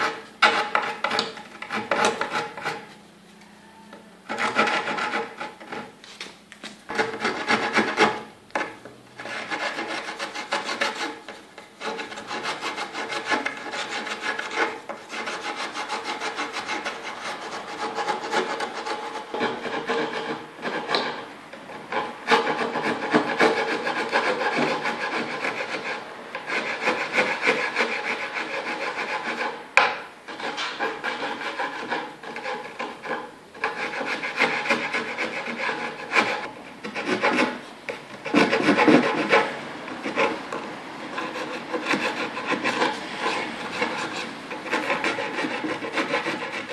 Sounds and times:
Filing (rasp): 0.0s - 2.9s, 4.3s - 6.0s, 6.9s - 46.7s
Rub: 3.6s - 6.0s, 6.9s - 21.2s, 21.9s - 29.6s, 30.3s - 37.6s, 38.2s - 40.6s, 41.2s - 46.7s.

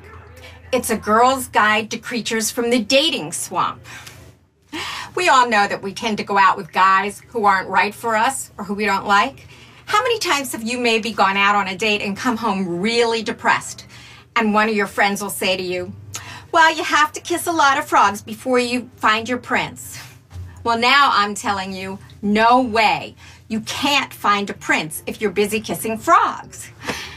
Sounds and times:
Speech: 0.0s - 4.2s, 5.1s - 26.8s.

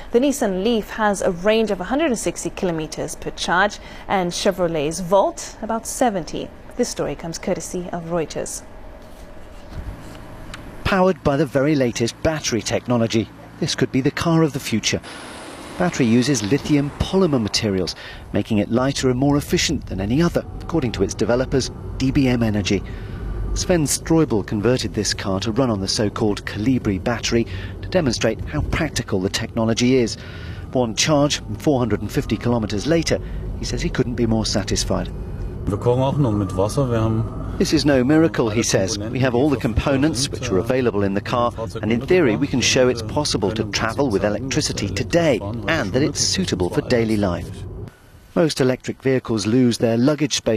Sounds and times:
Speech: 10.9s - 15.1s, 15.8s - 22.8s, 23.6s - 30.2s, 30.8s - 35.1s, 35.7s - 47.6s, 48.4s - 50.5s.

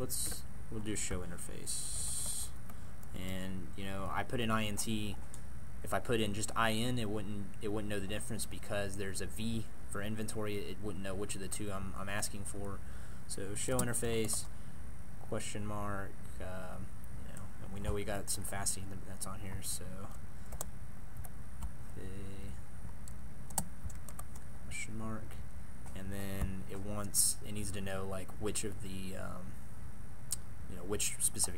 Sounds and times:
Speech: 0.0s - 2.6s, 3.2s - 5.2s, 5.9s - 14.5s, 15.3s - 20.2s, 22.0s - 22.6s, 24.7s - 29.6s, 30.7s - 31.5s.

